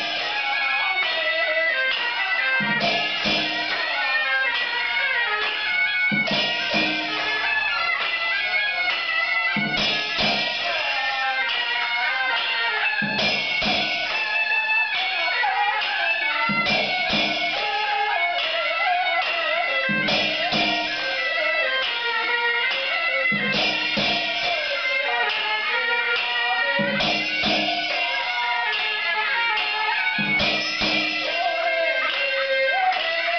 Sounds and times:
Music: 0:00.0 - 0:33.3.

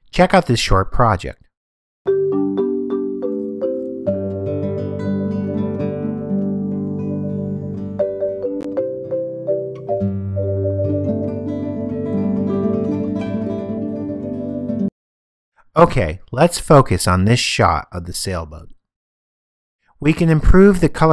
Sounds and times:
Vibraphone: 0:02.1 - 0:12.8.

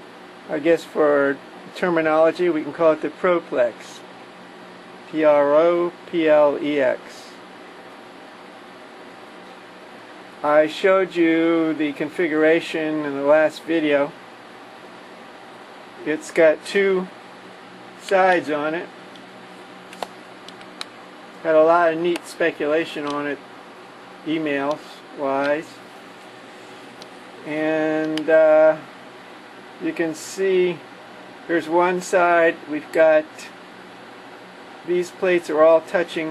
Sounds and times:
Speech: 0:00.5 - 0:04.1, 0:05.1 - 0:07.4, 0:10.4 - 0:14.2, 0:16.0 - 0:17.2, 0:18.0 - 0:18.9, 0:21.4 - 0:23.4, 0:24.3 - 0:25.8, 0:27.4 - 0:28.9, 0:29.8 - 0:30.8, 0:31.5 - 0:33.6, 0:34.8 - 0:36.3.

